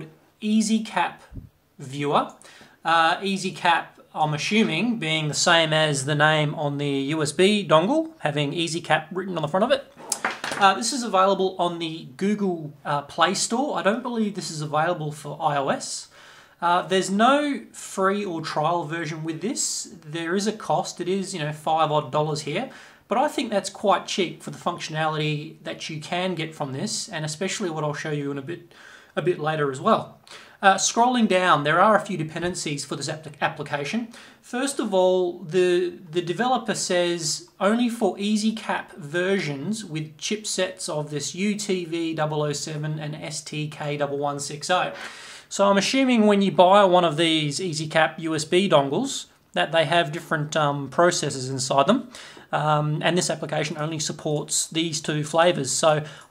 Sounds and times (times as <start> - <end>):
Speech: 0.0 - 56.3.